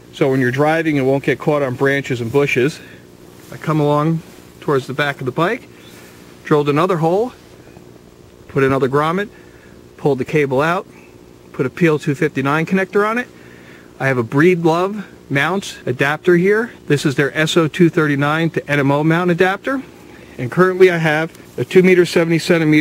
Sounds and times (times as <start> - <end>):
Outside, rural or natural: 0.0 - 22.8
Speech: 0.2 - 5.7, 6.4 - 7.4, 8.5 - 9.4, 10.0 - 10.9, 11.5 - 13.4, 14.0 - 22.8.